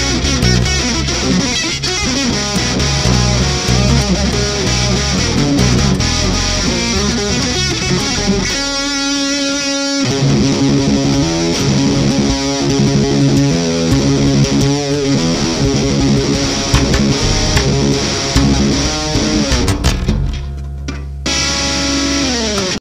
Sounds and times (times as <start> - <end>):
Bowed string instrument: 0.0 - 9.1, 11.6 - 20.9
Heavy metal: 0.0 - 22.7
Bass guitar: 0.0 - 22.8.